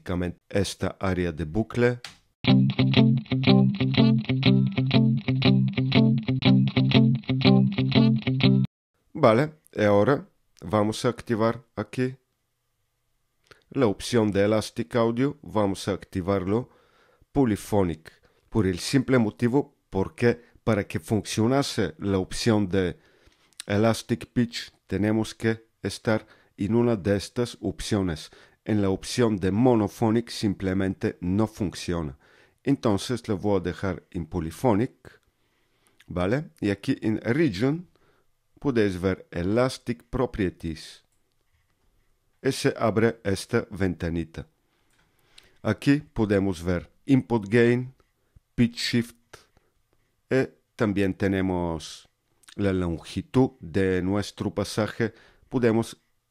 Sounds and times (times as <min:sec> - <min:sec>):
Speech: 0:00.0 - 0:02.1, 0:09.1 - 0:12.2, 0:13.7 - 0:16.7, 0:17.3 - 0:23.0, 0:23.6 - 0:35.2, 0:36.1 - 0:37.9, 0:38.6 - 0:41.1, 0:42.4 - 0:44.5, 0:45.6 - 0:48.0, 0:48.6 - 0:49.5, 0:50.3 - 0:56.0
Music: 0:02.5 - 0:08.7.